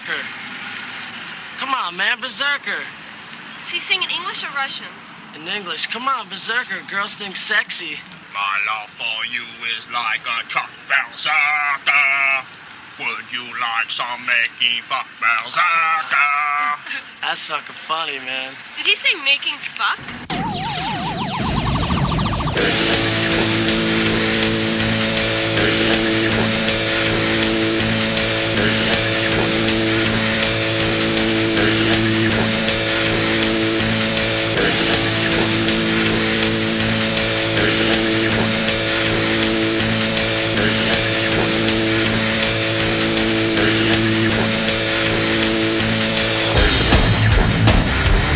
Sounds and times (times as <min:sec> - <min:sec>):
Ska: 0:20.3 - 0:48.3.